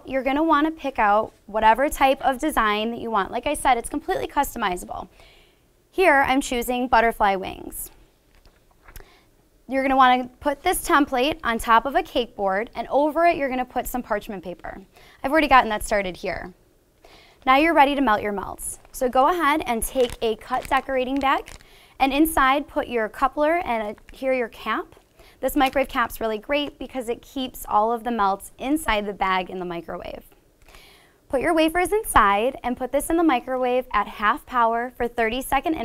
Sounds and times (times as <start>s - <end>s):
Speech: 0.0s - 5.1s, 6.0s - 8.0s, 9.7s - 16.6s, 17.4s - 30.3s, 31.3s - 35.8s.